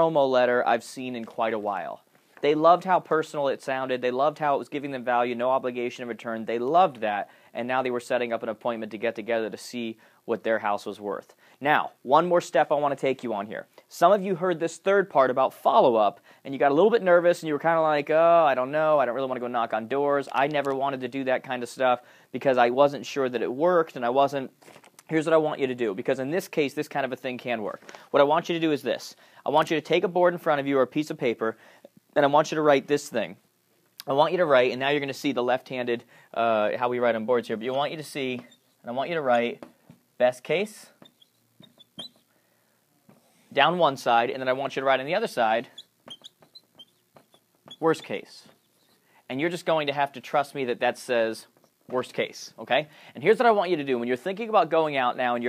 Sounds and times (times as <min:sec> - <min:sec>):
Speech: 0:00.0 - 0:33.4, 0:34.0 - 0:41.0, 0:43.5 - 0:45.8, 0:47.8 - 0:48.6, 0:49.3 - 0:55.4
Inside, small room: 0:00.0 - 0:55.4.